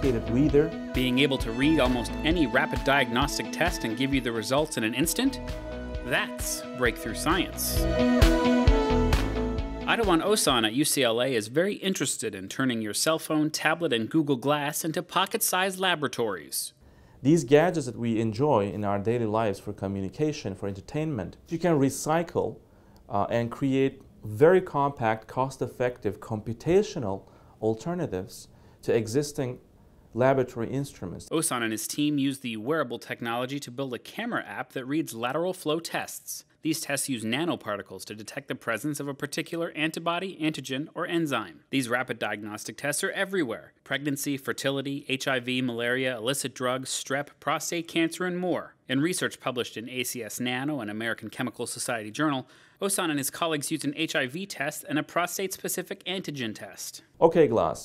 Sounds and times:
Speech: 0.0 - 5.4, 6.1 - 7.8, 9.9 - 29.6, 30.2 - 57.8.

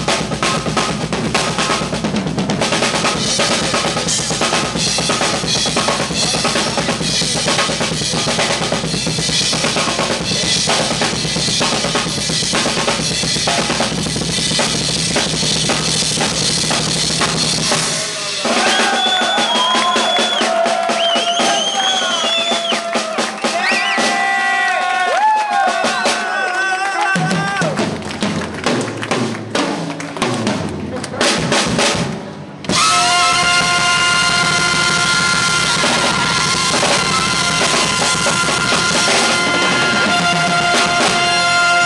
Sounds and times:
Bass drum: 0.0 - 18.0, 27.3 - 41.8
Drum kit: 0.0 - 41.8
Drum roll: 0.0 - 41.8.

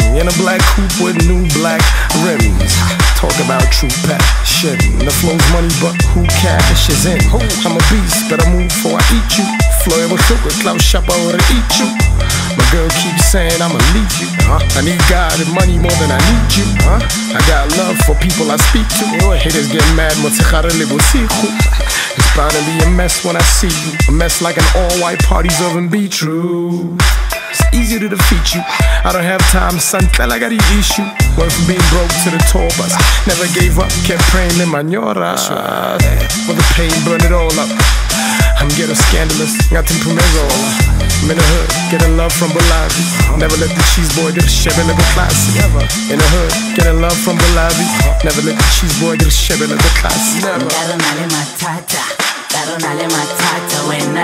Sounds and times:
Music: 0.0 - 54.2.

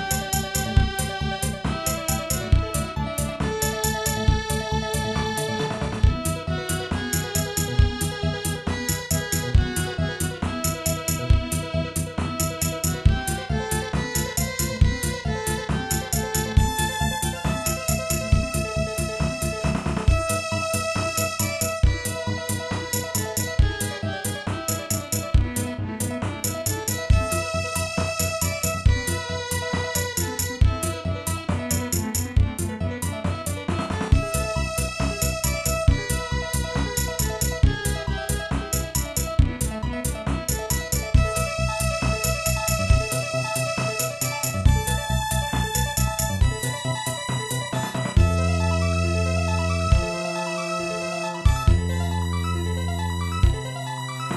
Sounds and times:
Soundtrack music: 0.0 - 54.3.

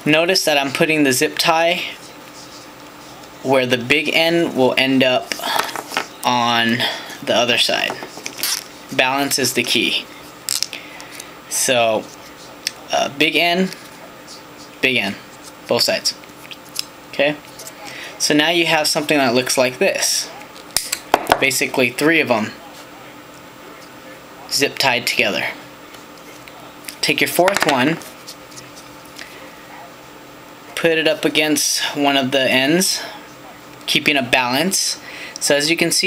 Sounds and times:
Speech: 0.0 - 5.3, 6.2 - 8.0, 8.9 - 10.1, 11.5 - 16.2, 17.1 - 20.6, 21.4 - 25.7, 26.3 - 28.0, 30.7 - 36.0.

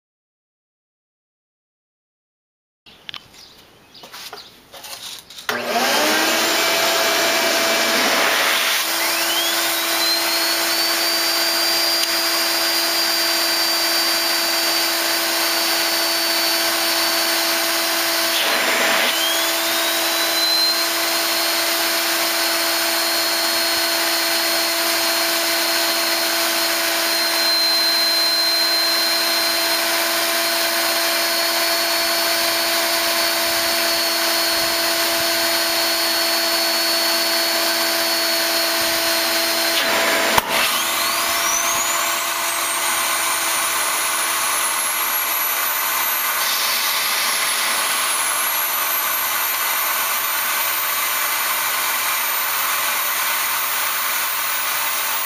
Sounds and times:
Engine: 5.5 - 55.2.

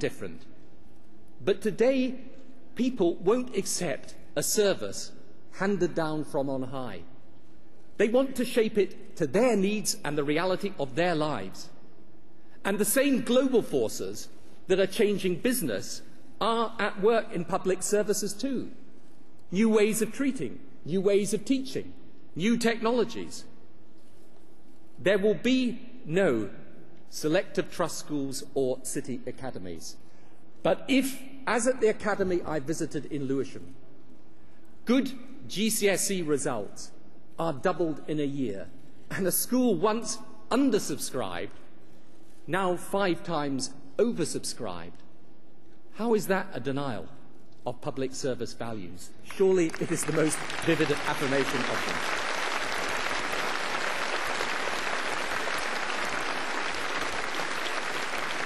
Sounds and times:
Male speech, man speaking: 0.0 - 0.5, 1.4 - 7.1, 8.0 - 11.7, 12.6 - 18.8, 19.5 - 23.5, 25.0 - 30.0, 30.6 - 33.7, 34.9 - 41.5, 42.5 - 45.0, 46.0 - 52.0
Narration, monologue: 0.0 - 58.4.

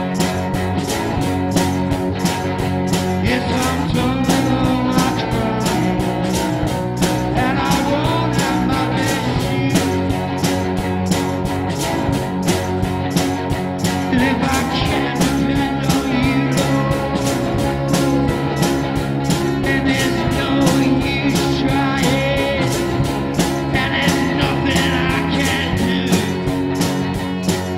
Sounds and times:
Rock music: 0.0 - 27.7.

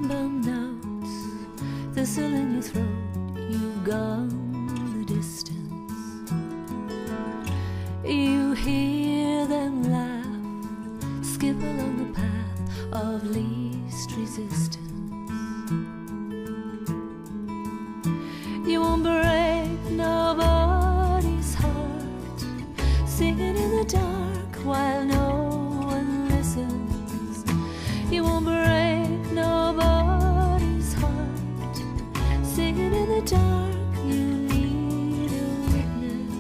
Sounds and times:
Female singing: 0.0 - 6.3, 8.0 - 10.6, 11.2 - 15.4, 18.5 - 36.4
Music: 0.0 - 36.4.

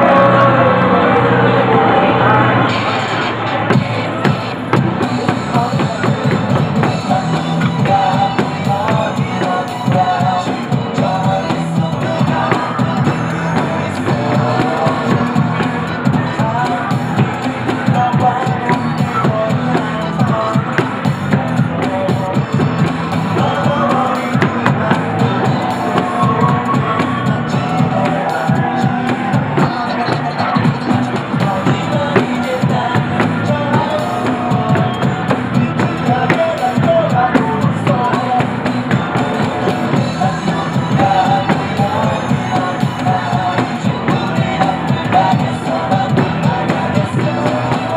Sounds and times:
Music: 0.0 - 47.9.

